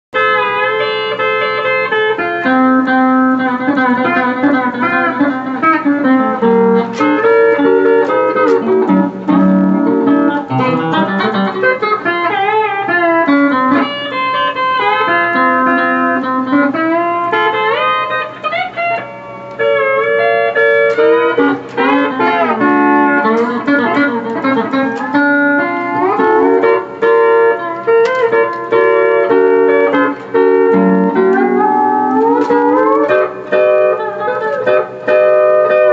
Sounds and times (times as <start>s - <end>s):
Music: 0.1s - 35.9s.